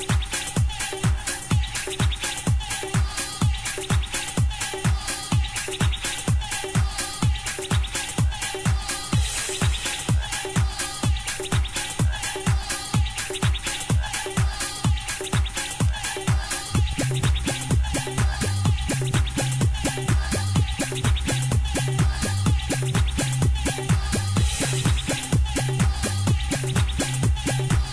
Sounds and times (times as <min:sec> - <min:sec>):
Music: 0:00.0 - 0:27.9.